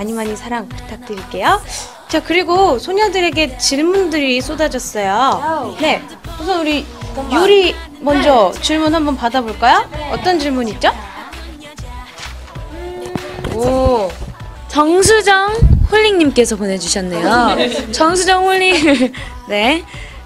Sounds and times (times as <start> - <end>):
Music: 0.0 - 20.2.